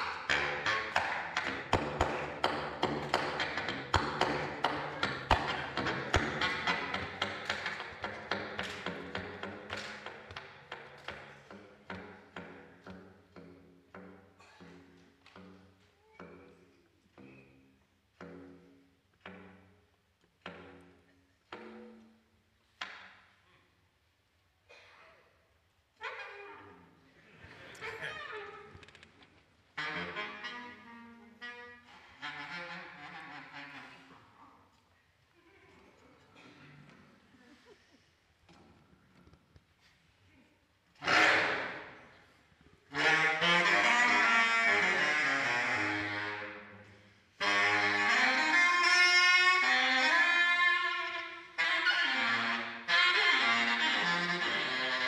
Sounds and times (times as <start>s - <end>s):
Wind instrument, woodwind instrument: 29.7s - 34.8s, 41.0s - 42.2s, 42.8s - 55.0s.